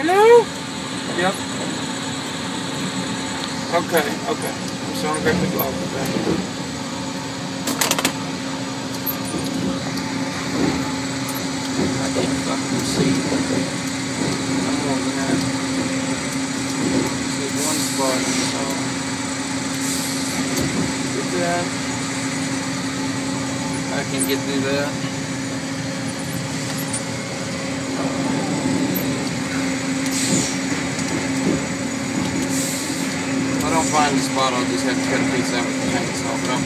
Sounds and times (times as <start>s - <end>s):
Speech: 3.7s - 6.2s, 14.6s - 15.5s, 17.3s - 18.8s, 21.1s - 21.7s, 23.9s - 25.0s, 33.6s - 36.6s.